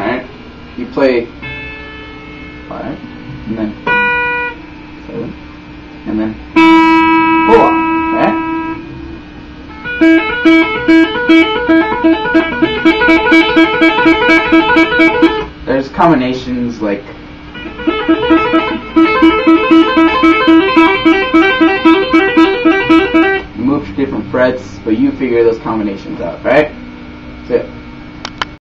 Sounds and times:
Speech: 0.0 - 1.3, 6.0 - 6.4, 15.6 - 17.2, 23.6 - 26.8, 27.4 - 27.8
Music: 1.4 - 4.8, 6.6 - 15.6, 17.6 - 28.6.

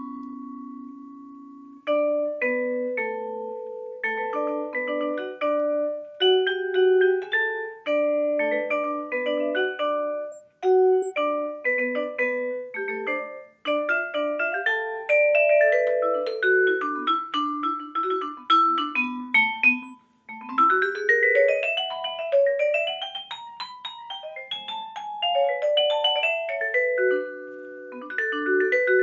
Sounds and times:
Glockenspiel: 0.0 - 29.0
Marimba, xylophone: 0.0 - 29.0.

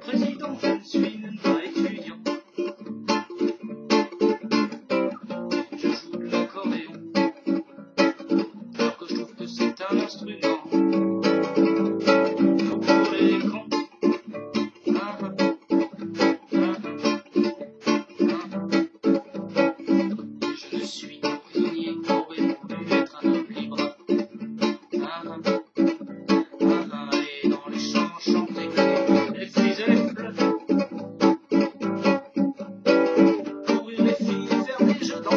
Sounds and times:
Music: 0.0 - 35.3.

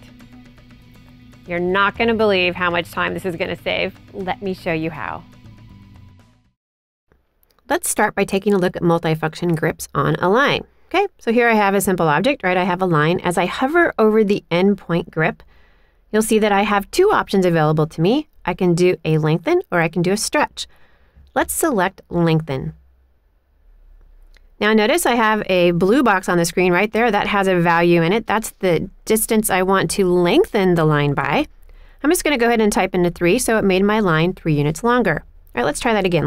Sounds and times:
Speech: 1.5 - 5.2, 7.7 - 15.4, 16.2 - 20.7, 21.4 - 22.8, 24.6 - 36.2.

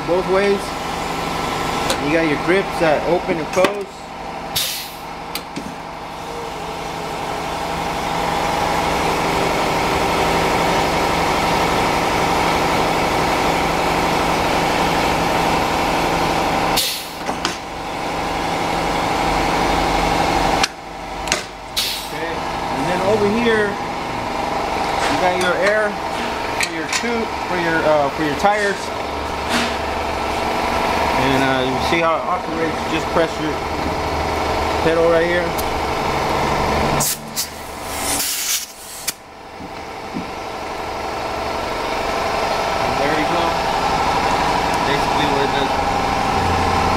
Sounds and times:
Speech: 0.0 - 0.7, 1.9 - 4.0, 22.1 - 23.8, 25.0 - 26.0, 26.6 - 28.9, 31.2 - 33.6, 34.8 - 35.6, 42.9 - 43.6, 44.8 - 45.8.

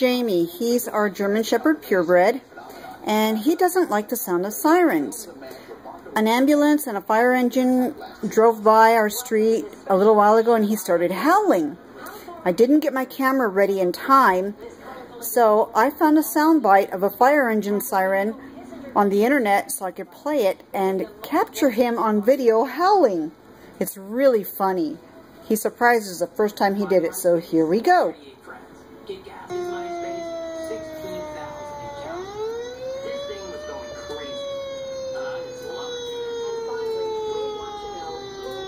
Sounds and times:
Speech: 0.0 - 32.2, 33.0 - 36.1.

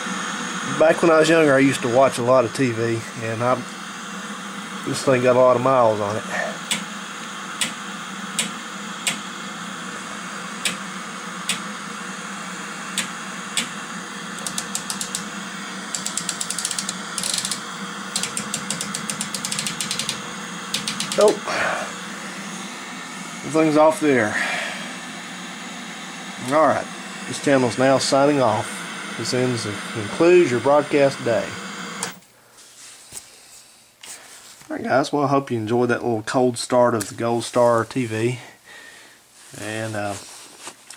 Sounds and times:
Speech: 0.7 - 3.7, 4.8 - 6.6, 21.2 - 21.9, 23.4 - 24.4, 26.4 - 31.6, 34.6 - 38.6, 39.5 - 40.3.

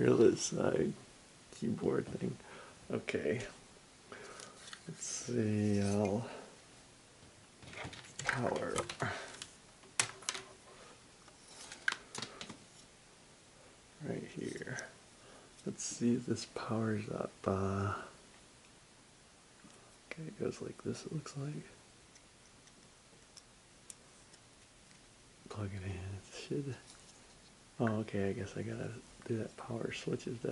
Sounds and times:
Speech: 0.0 - 3.6, 4.9 - 6.5, 8.2 - 9.3, 14.0 - 15.0, 15.6 - 18.2, 20.1 - 21.8, 25.5 - 26.8, 27.8 - 30.5
Inside, small room: 0.0 - 30.5.

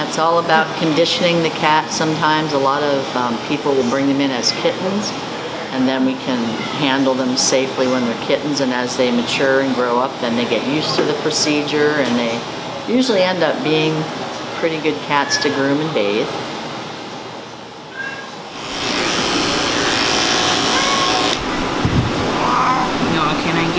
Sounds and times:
Speech: 0.0 - 16.4, 23.0 - 23.7
Inside, large room or hall: 17.9 - 23.7.

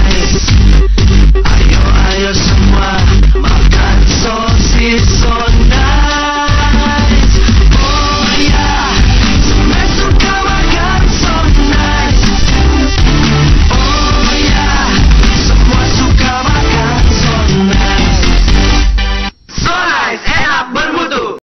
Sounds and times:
Music: 0.0 - 19.5
Speech: 19.5 - 21.4.

